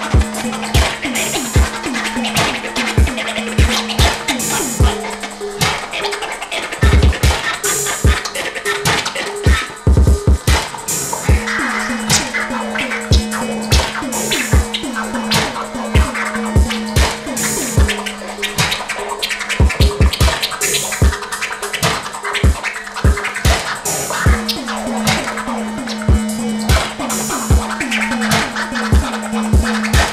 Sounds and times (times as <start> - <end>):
Scratching (performance technique): 0.0 - 30.1.